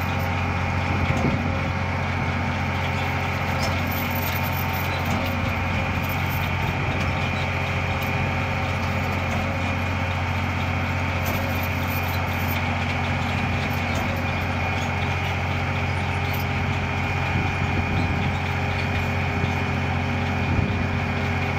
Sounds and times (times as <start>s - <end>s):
Vehicle: 0.0s - 21.5s.